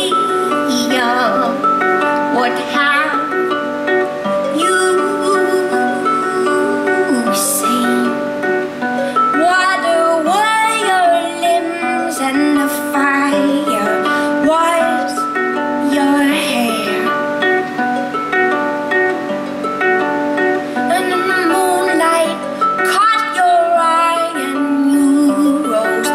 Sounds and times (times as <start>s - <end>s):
Plucked string instrument: 0.0s - 26.1s.